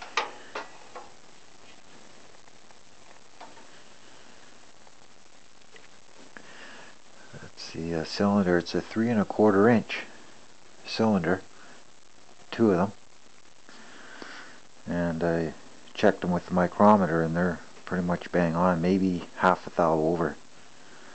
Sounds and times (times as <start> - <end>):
Speech: 7.3 - 10.1, 10.8 - 11.5, 12.5 - 13.0, 14.8 - 20.4.